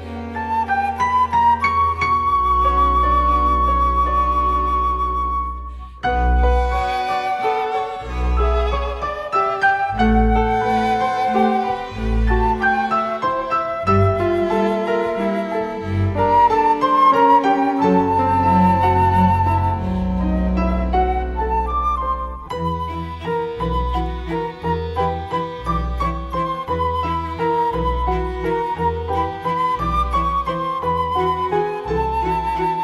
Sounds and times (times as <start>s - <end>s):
Violin, fiddle: 0.0s - 32.8s.